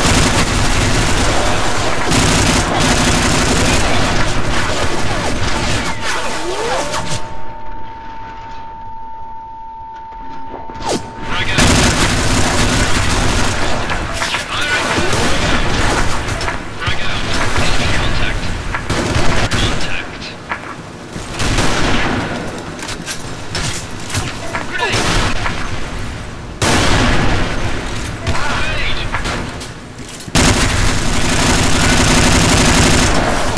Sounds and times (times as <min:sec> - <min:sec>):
Machine gun: 0:00.0 - 0:07.0, 0:11.6 - 0:16.5, 0:30.3 - 0:33.5.